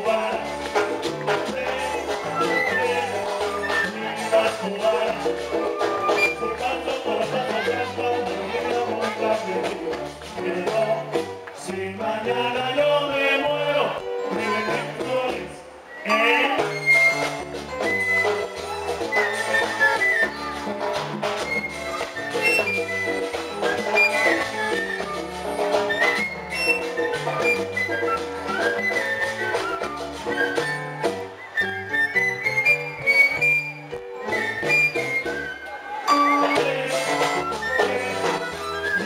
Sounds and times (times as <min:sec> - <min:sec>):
Pizzicato: 0:00.0 - 0:11.4.